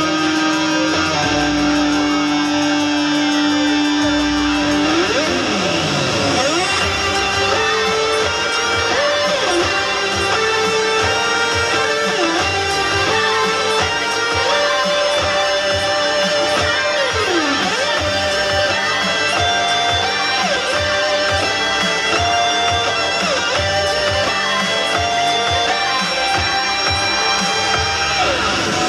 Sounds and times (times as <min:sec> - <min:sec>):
Electric guitar: 0:00.0 - 0:28.8.